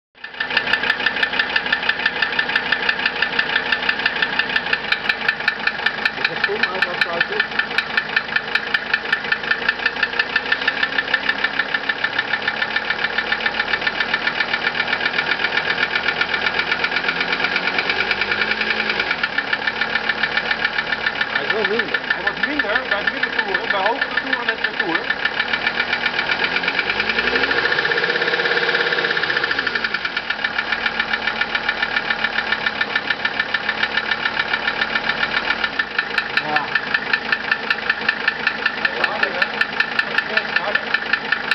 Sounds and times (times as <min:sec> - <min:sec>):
Speech: 0:06.2 - 0:07.5, 0:21.4 - 0:25.1, 0:36.4 - 0:36.8, 0:38.8 - 0:41.0.